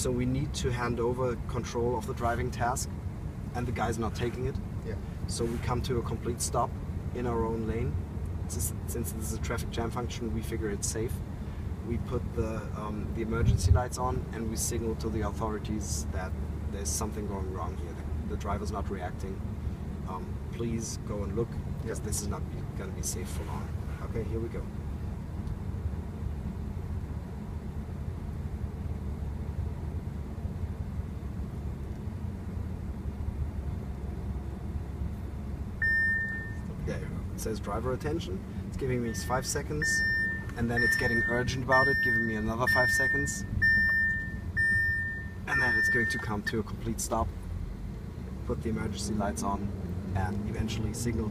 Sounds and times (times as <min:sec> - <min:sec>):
Car: 0:00.0 - 0:51.3.